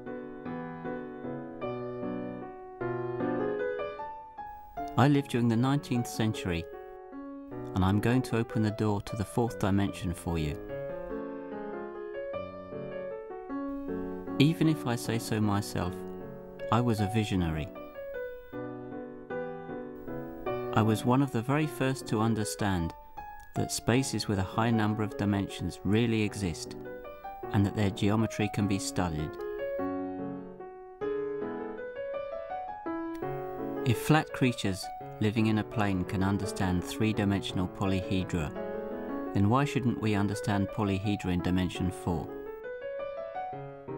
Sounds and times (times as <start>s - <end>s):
Music: 0.0s - 43.9s
Speech: 4.9s - 6.7s, 7.7s - 10.7s, 14.4s - 16.1s, 16.7s - 17.8s, 20.7s - 26.8s, 27.5s - 29.4s, 33.8s - 38.6s, 39.3s - 42.4s.